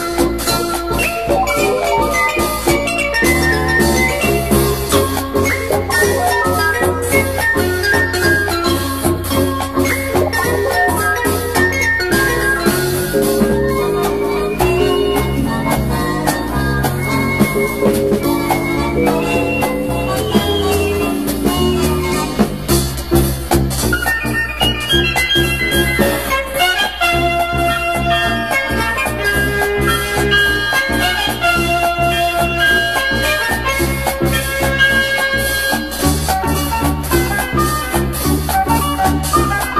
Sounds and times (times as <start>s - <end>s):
Swing music: 0.0s - 39.7s.